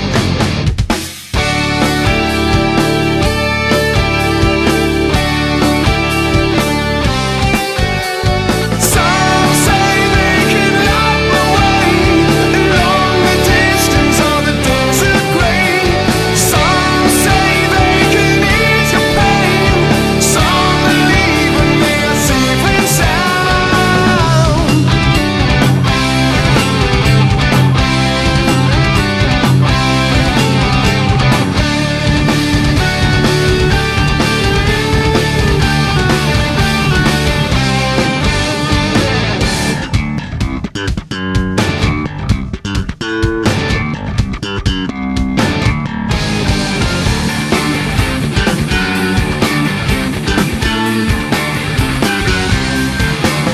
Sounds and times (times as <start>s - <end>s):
Heavy metal: 0.0s - 53.5s
Progressive rock: 0.0s - 53.5s.